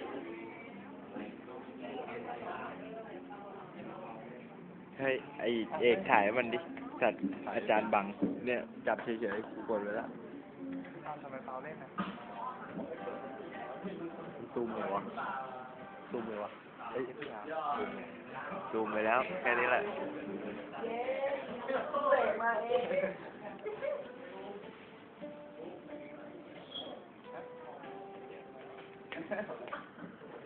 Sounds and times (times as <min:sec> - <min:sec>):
Acoustic guitar: 0:00.0 - 0:30.4.